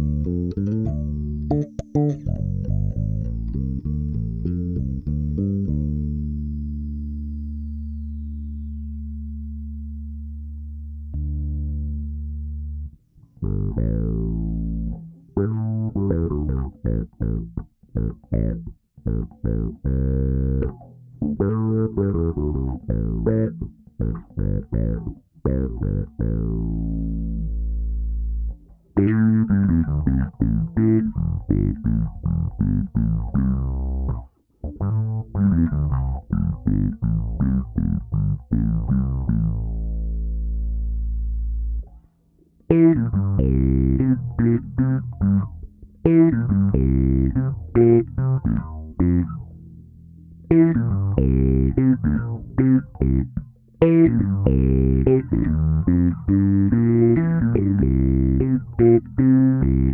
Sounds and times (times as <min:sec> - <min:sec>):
Bass guitar: 0:00.0 - 0:59.9.